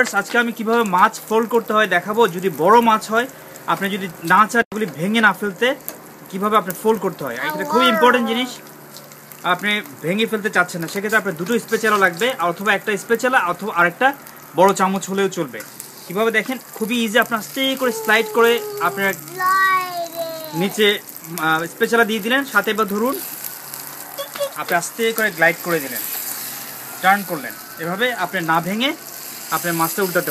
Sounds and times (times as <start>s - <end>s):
Frying (food): 0.0s - 30.3s
Sizzle: 0.0s - 30.3s.